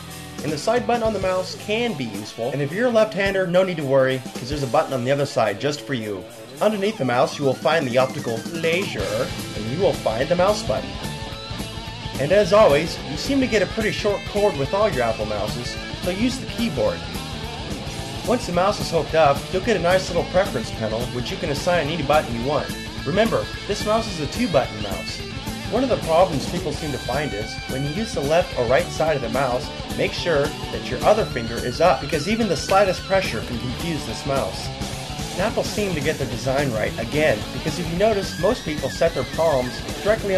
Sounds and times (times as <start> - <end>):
Music: 0.0 - 40.3
Speech: 0.4 - 11.0, 12.2 - 17.0, 18.3 - 34.7, 35.4 - 40.3.